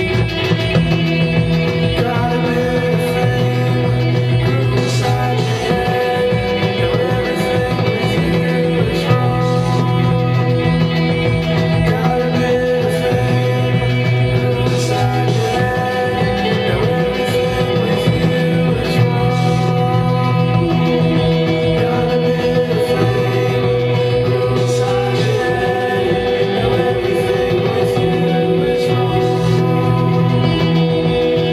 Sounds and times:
Vocal music: 0.0 - 31.5.

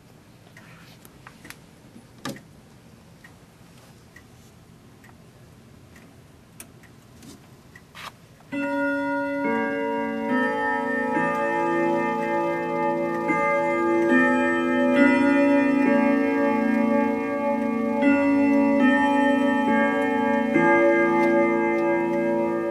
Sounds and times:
Music: 9.0 - 22.7.

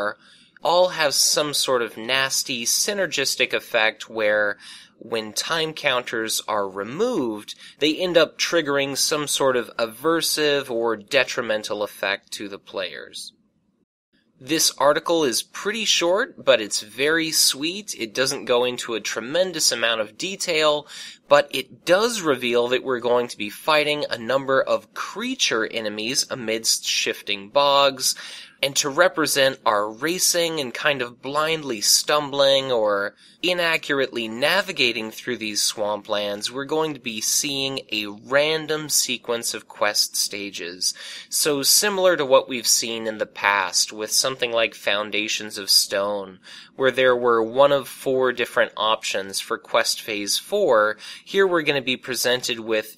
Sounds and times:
Narration, monologue: 0.0 - 52.9.

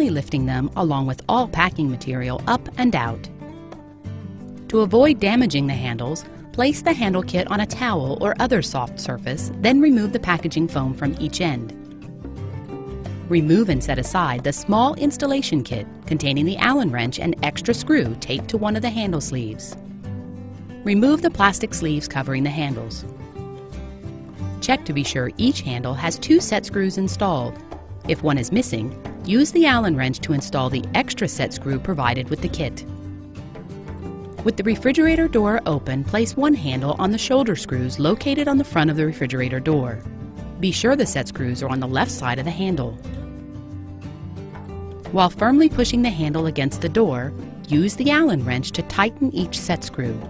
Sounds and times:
Speech: 0.0 - 3.3, 4.7 - 11.7, 13.3 - 19.8, 20.9 - 23.1, 24.6 - 32.8, 34.4 - 40.0, 40.6 - 43.0, 45.1 - 50.3
Music: 0.0 - 50.3.

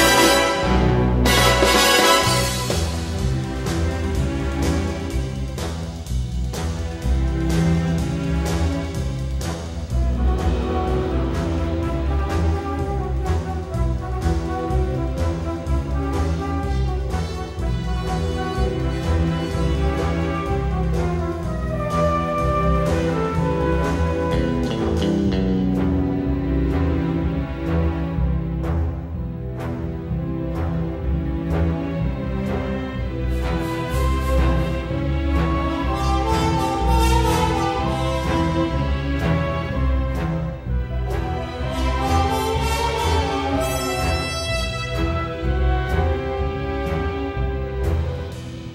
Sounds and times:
Music: 0.0 - 48.7.

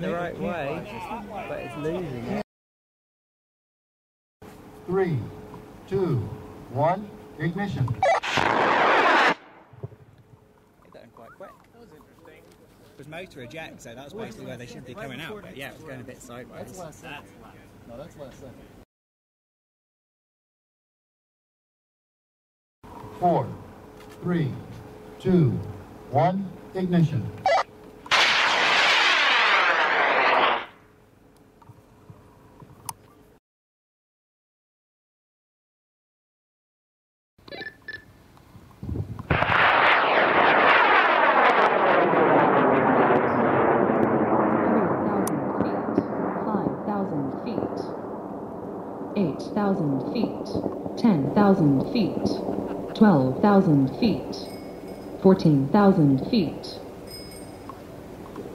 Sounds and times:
Outside, rural or natural: 4.4 - 18.8, 22.8 - 33.4, 37.4 - 58.5.

